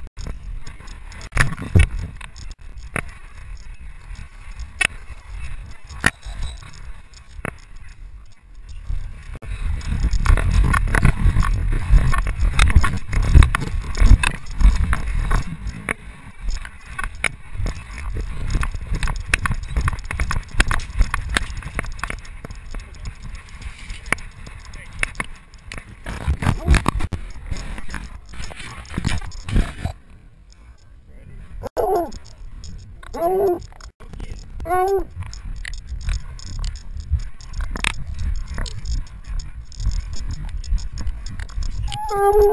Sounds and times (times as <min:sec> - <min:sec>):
Animal: 0:05.1 - 0:10.6, 0:30.6 - 0:42.5.